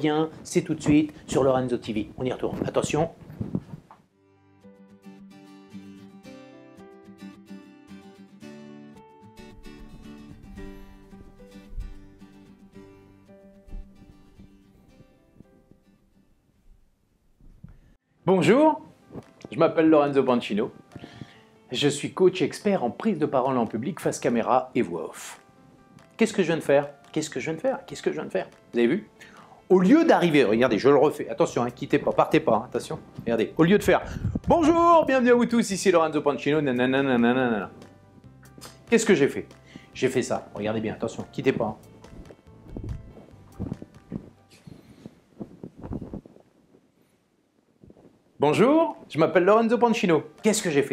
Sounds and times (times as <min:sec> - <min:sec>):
Speech: 0:00.0 - 0:03.2, 0:18.3 - 0:18.9, 0:19.5 - 0:20.8, 0:21.7 - 0:25.4, 0:26.2 - 0:29.1, 0:29.7 - 0:37.7, 0:38.9 - 0:41.8, 0:48.4 - 0:50.9
Music: 0:00.0 - 0:16.8, 0:17.8 - 0:46.3, 0:47.9 - 0:50.9.